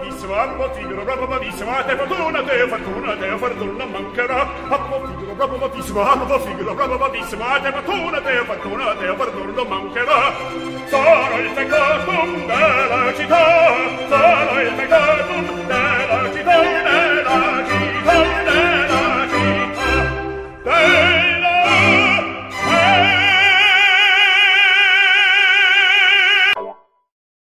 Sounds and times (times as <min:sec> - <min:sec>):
Music: 0:00.0 - 0:27.1.